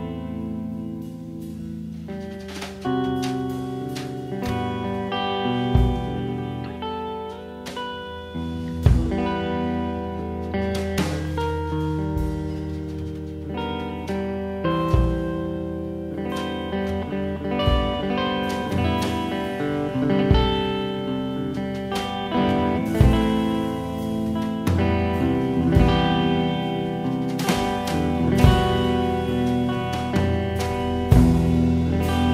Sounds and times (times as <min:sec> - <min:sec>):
Music: 0:00.0 - 0:32.3.